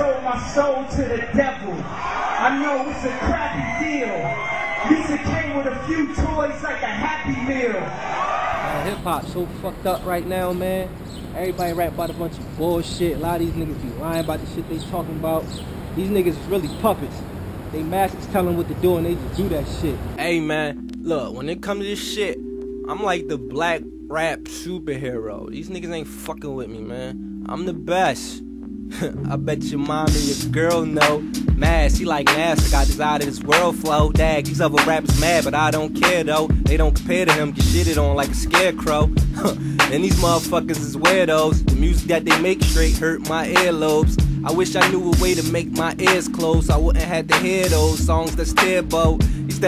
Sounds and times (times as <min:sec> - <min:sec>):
Speech: 0:00.0 - 0:01.8, 0:02.4 - 0:04.3, 0:04.9 - 0:07.9, 0:08.8 - 0:28.4, 0:29.0 - 0:32.2
Music: 0:00.0 - 0:10.8, 0:11.5 - 0:15.4, 0:18.2 - 0:49.6.